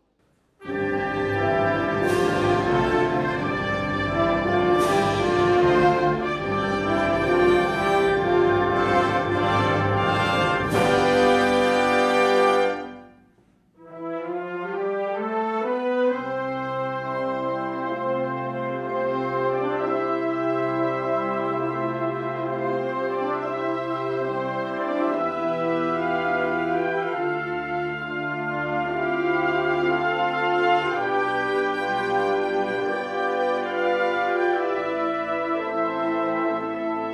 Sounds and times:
Music: 0.0 - 37.1.

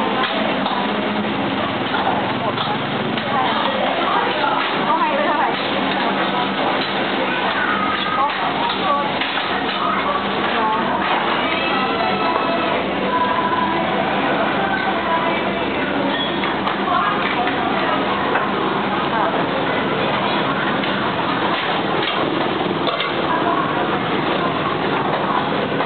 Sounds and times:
Speech: 0.0 - 25.8.

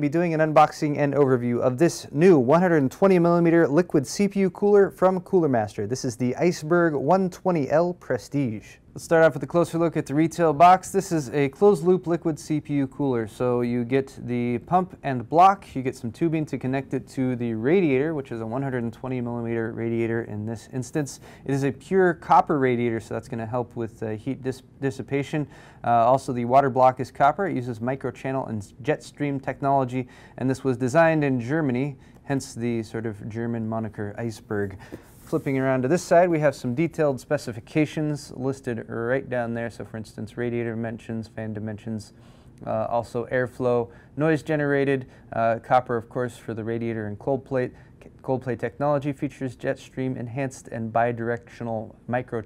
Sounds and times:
Speech: 0.0 - 52.4.

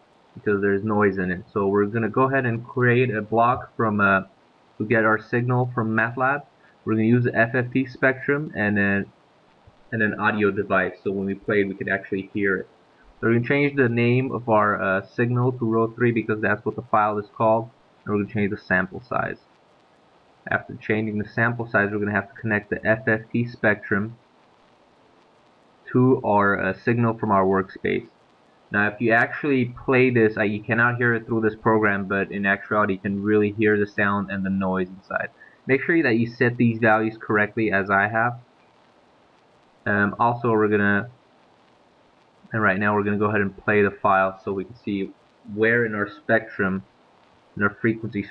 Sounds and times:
Speech: 0.4 - 9.1, 9.9 - 19.4, 20.5 - 24.2, 25.9 - 28.1, 28.7 - 38.4, 39.9 - 41.2, 42.5 - 46.9, 47.6 - 48.3.

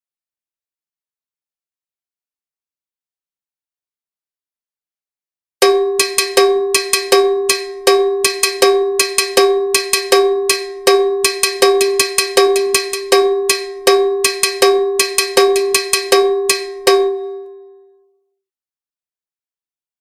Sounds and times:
Cowbell: 5.6 - 17.9.

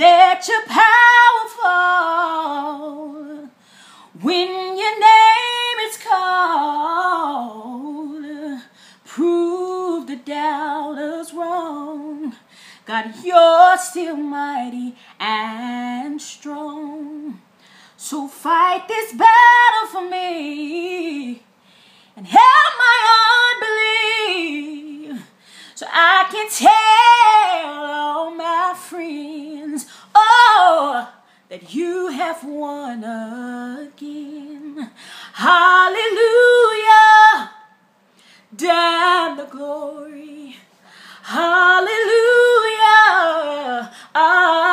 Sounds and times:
Female singing: 0.0 - 3.6, 4.2 - 17.4, 18.0 - 21.5, 22.2 - 37.8, 38.5 - 44.7.

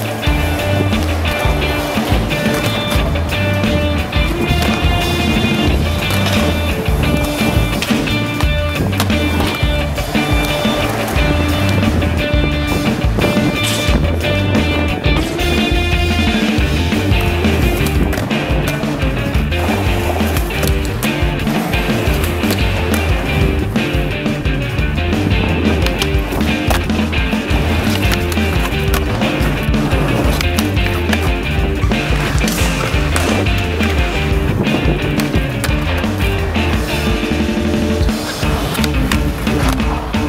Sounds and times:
Music: 0.0 - 40.2
Skateboard: 0.0 - 40.2.

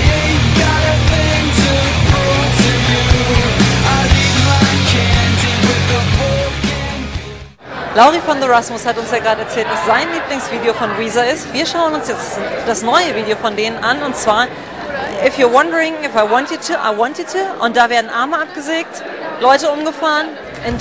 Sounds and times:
Speech: 7.8 - 20.8.

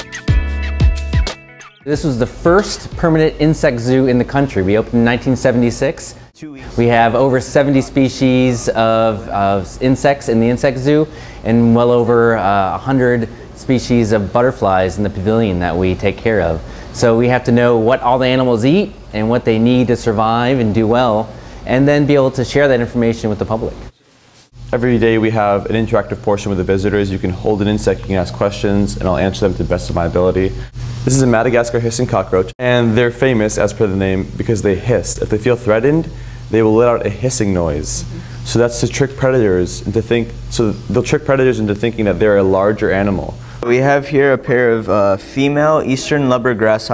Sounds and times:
Speech: 1.9 - 23.9, 24.7 - 46.9.

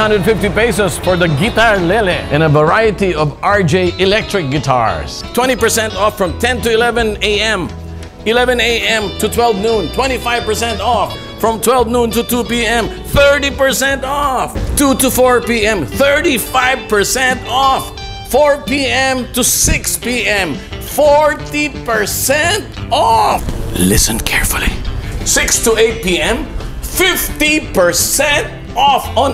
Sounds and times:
Speech: 0.0 - 7.7, 8.3 - 29.3.

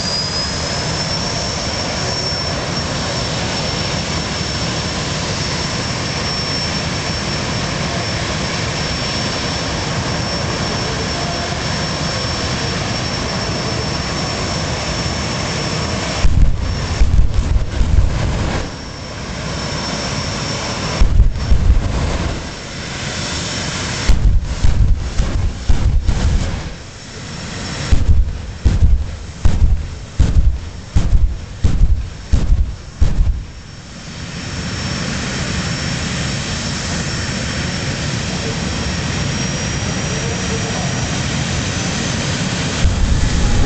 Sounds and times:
Vehicle: 0.0 - 43.6.

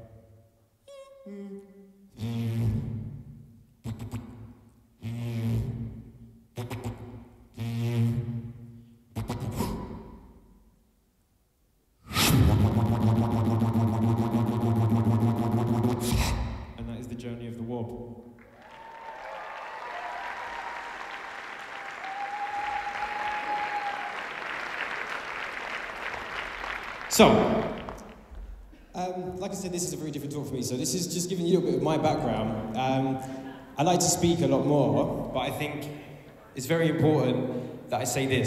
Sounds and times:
Inside, large room or hall: 0.0 - 38.4
Beatboxing: 2.2 - 3.2, 3.8 - 6.0, 6.6 - 10.3, 12.1 - 17.0
Speech: 16.8 - 18.1, 27.1 - 27.7, 29.0 - 38.4.

